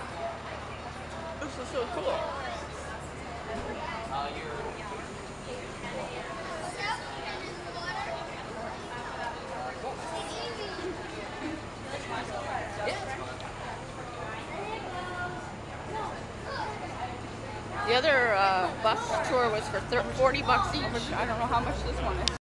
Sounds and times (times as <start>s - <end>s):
Vehicle: 0.0s - 22.4s.